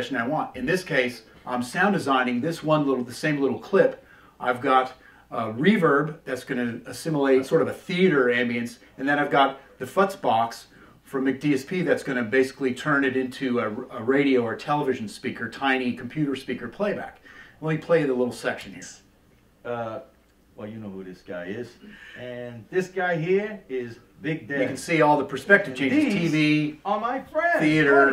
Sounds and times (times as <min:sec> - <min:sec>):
Speech: 0:00.0 - 0:28.1.